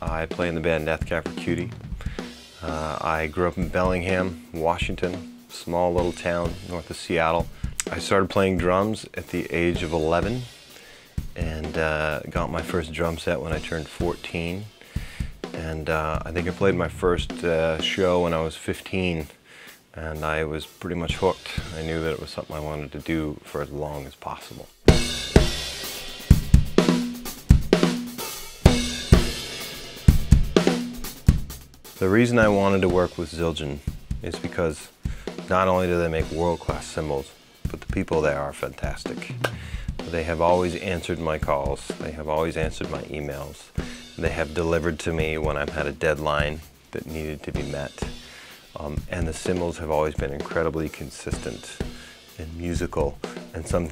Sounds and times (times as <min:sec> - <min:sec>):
Speech: 0:00.0 - 0:01.9, 0:02.6 - 0:10.5, 0:11.4 - 0:14.8, 0:15.5 - 0:24.8, 0:32.0 - 0:39.4, 0:40.0 - 0:48.1, 0:48.8 - 0:53.9
Bass drum: 0:00.0 - 0:08.8, 0:11.2 - 0:14.3, 0:15.0 - 0:18.4, 0:24.8 - 0:37.1, 0:37.7 - 0:53.9
Drum kit: 0:00.0 - 0:53.9
Snare drum: 0:00.3 - 0:03.0, 0:07.7 - 0:08.7, 0:15.0 - 0:18.0, 0:24.8 - 0:33.3, 0:35.3 - 0:37.1, 0:37.7 - 0:52.1, 0:52.7 - 0:53.9.